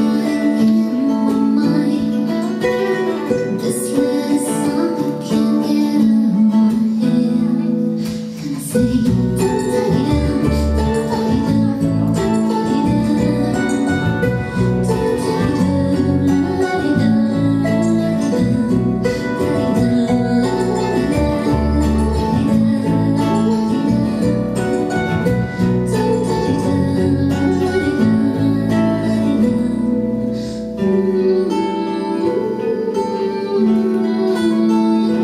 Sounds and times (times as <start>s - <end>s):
Acoustic guitar: 0.0s - 35.2s.